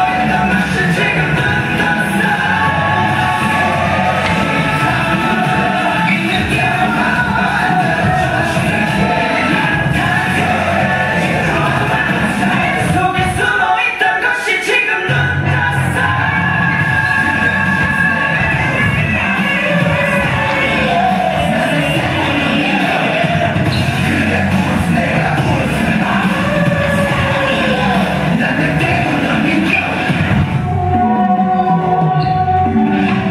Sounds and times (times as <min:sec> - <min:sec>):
Inside, large room or hall: 0:00.0 - 0:33.3
Music: 0:00.0 - 0:33.3.